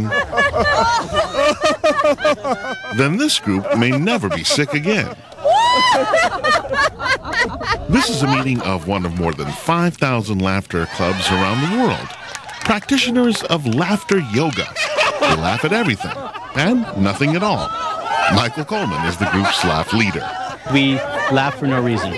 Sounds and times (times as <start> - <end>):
Snicker: 0.0 - 9.6, 10.9 - 22.1
Speech: 3.0 - 5.2, 7.9 - 17.7, 18.3 - 22.1.